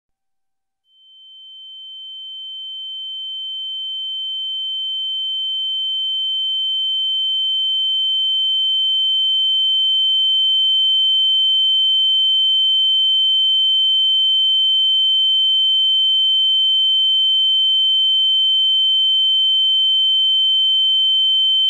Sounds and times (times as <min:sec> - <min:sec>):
Sine wave: 0:00.8 - 0:21.6.